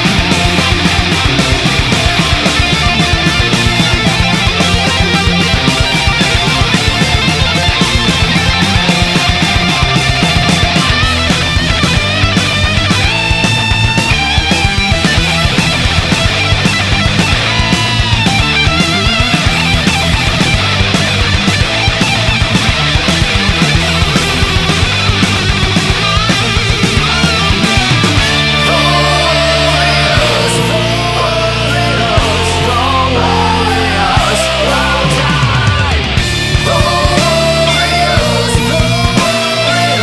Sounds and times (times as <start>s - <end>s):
Heavy metal: 0.0s - 40.0s.